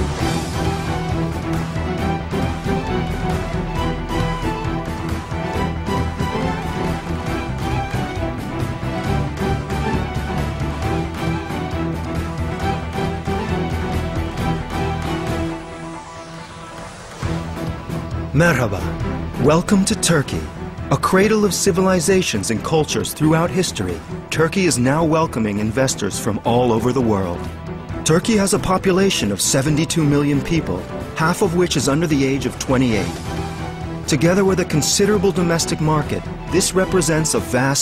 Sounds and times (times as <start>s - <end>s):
Music: 0.0s - 37.8s
Speech: 18.3s - 33.2s, 34.1s - 37.8s.